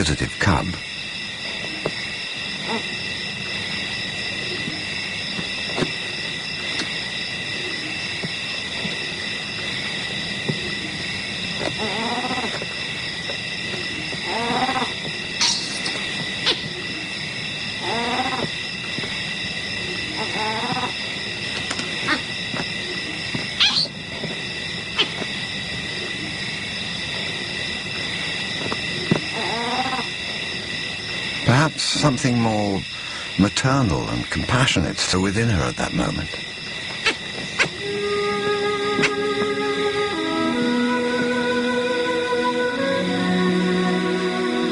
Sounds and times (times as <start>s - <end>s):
Wild animals: 11.8s - 12.6s, 14.2s - 17.1s, 17.8s - 18.5s, 19.9s - 21.0s, 29.0s - 30.2s.